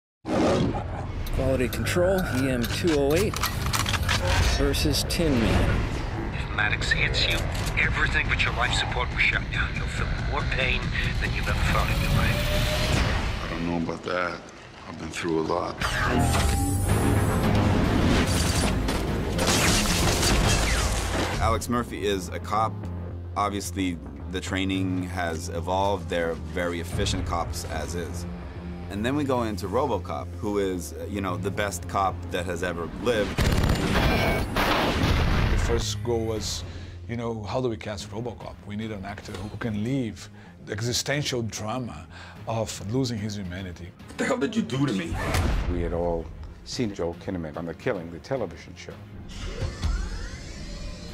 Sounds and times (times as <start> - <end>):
Music: 0.3 - 51.1
Speech: 6.4 - 12.4, 23.4 - 28.2, 35.6 - 49.0.